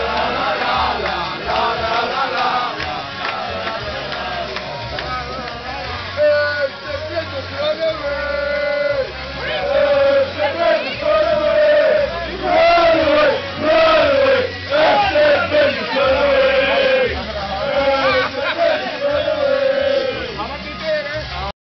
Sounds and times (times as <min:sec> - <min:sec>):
Choir: 0:00.0 - 0:05.1, 0:08.0 - 0:20.5
Male singing: 0:00.0 - 0:21.5
Speech: 0:03.8 - 0:21.5.